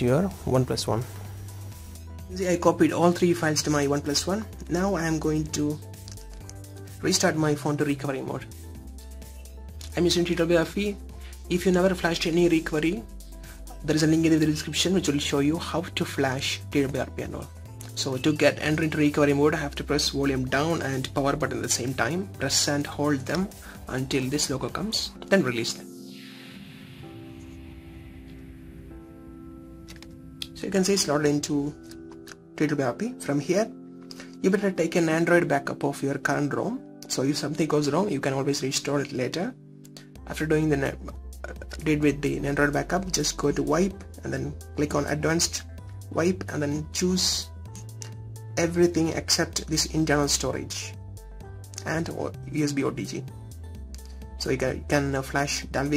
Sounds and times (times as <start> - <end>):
Speech: 0.0 - 1.1, 2.3 - 5.8, 7.0 - 8.4, 9.9 - 13.0, 13.8 - 25.9, 30.6 - 31.8, 32.6 - 33.7, 34.4 - 39.6, 40.3 - 47.5, 48.6 - 50.9, 51.8 - 53.3, 54.4 - 55.9.